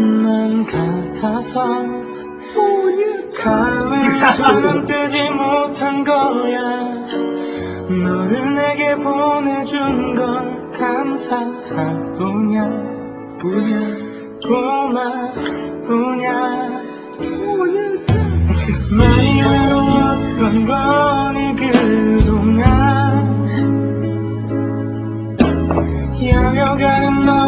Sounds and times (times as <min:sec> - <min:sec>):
Music: 0:00.0 - 0:27.4.